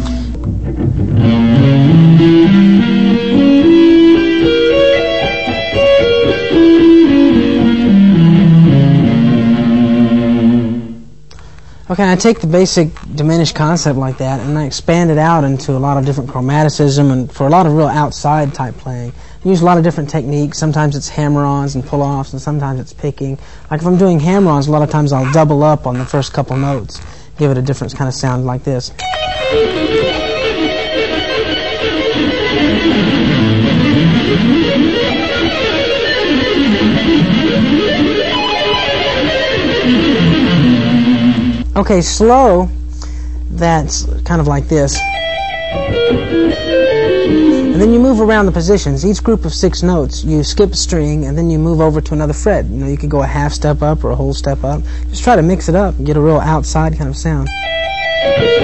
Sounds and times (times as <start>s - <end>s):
Music: 0.0s - 11.2s, 29.0s - 41.8s, 45.0s - 48.5s, 57.5s - 58.6s
Speech: 11.9s - 29.0s, 41.8s - 42.8s, 43.5s - 45.0s, 47.7s - 57.5s.